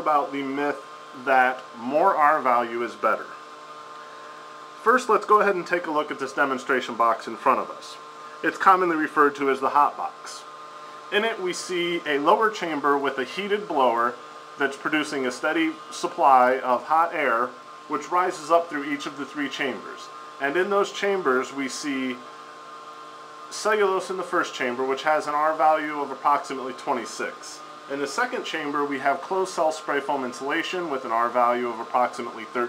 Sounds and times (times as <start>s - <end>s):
Speech: 0.0s - 3.4s, 4.8s - 10.5s, 11.1s - 22.3s, 23.5s - 32.6s.